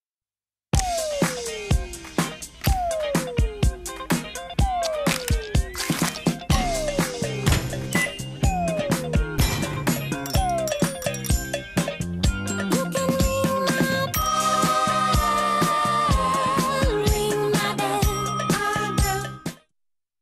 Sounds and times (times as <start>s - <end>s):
Music for children: 0.8s - 19.7s.